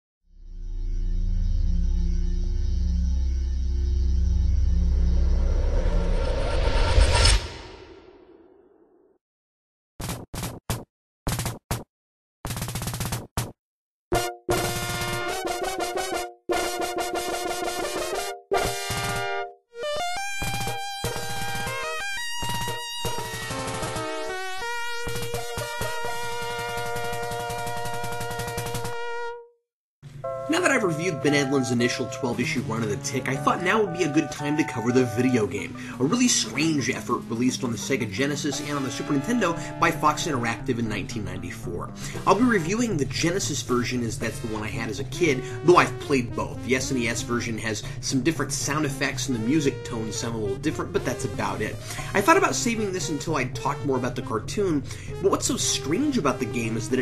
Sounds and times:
Music: 0:00.3 - 0:06.0, 0:14.2 - 0:57.0.

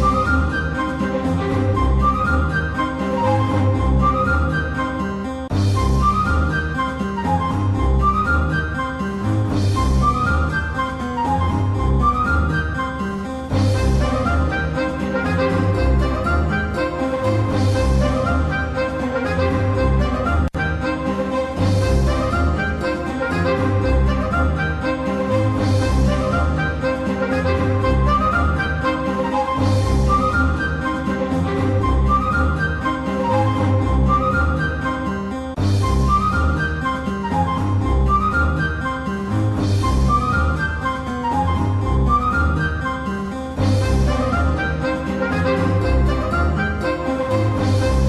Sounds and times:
Background music: 0:00.0 - 0:48.0.

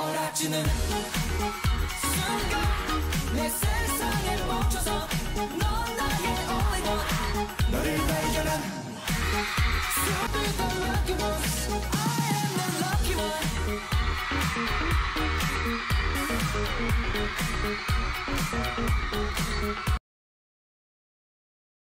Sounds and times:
Exciting music: 0:00.0 - 0:20.0.

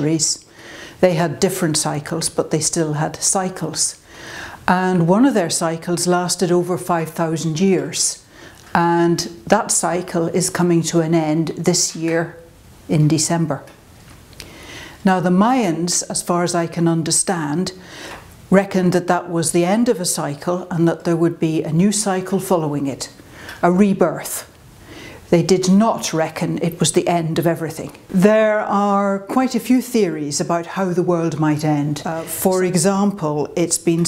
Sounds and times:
Speech: 0:00.0 - 0:04.0, 0:04.7 - 0:13.8, 0:15.0 - 0:17.8, 0:18.5 - 0:24.6, 0:25.3 - 0:34.0.

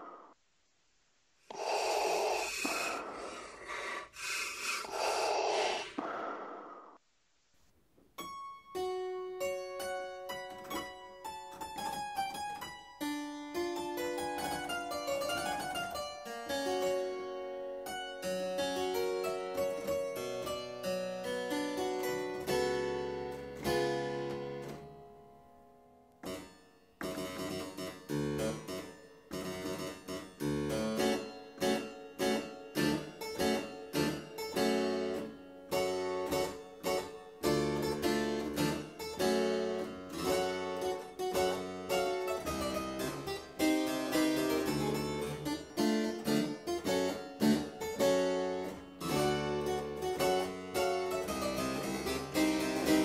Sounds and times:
Harpsichord: 0:08.3 - 0:25.0, 0:26.3 - 0:53.0.

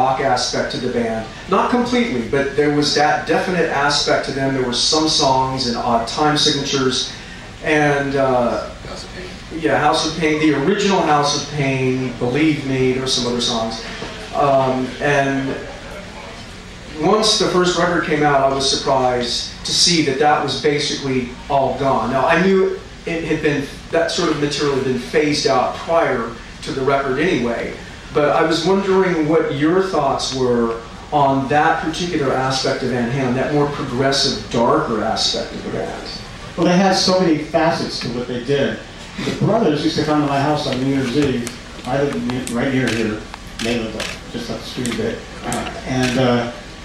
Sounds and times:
Male speech, man speaking: 0:00.0 - 0:46.6.

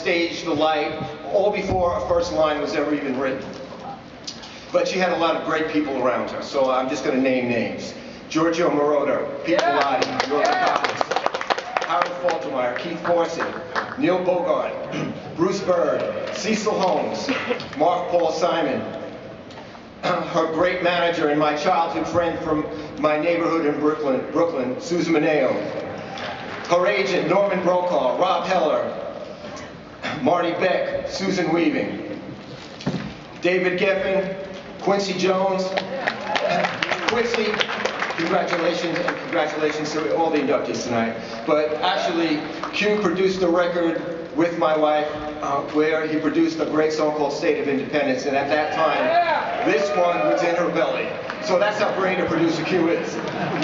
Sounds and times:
Male speech, man speaking: 0:00.0 - 0:03.5, 0:04.7 - 0:11.0, 0:11.8 - 0:18.9, 0:20.0 - 0:25.8, 0:26.7 - 0:29.0, 0:30.1 - 0:32.1, 0:33.4 - 0:35.9, 0:36.8 - 0:53.2.

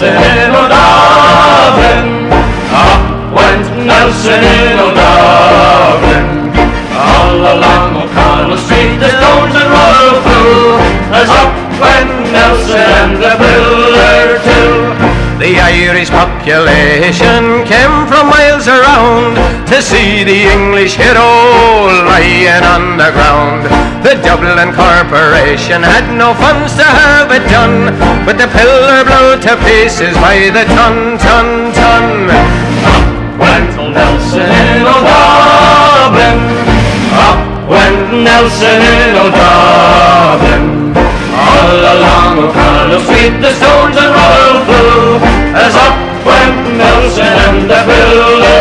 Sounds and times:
Music: 0:00.0 - 0:48.6.

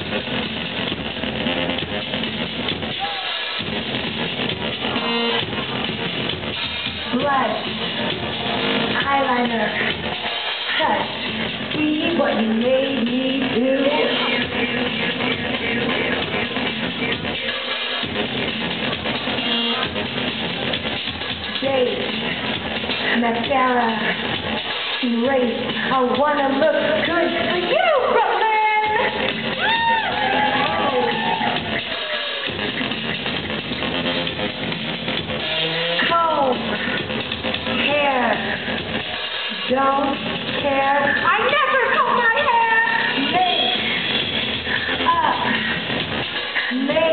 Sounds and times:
Music: 0:00.0 - 0:47.1.

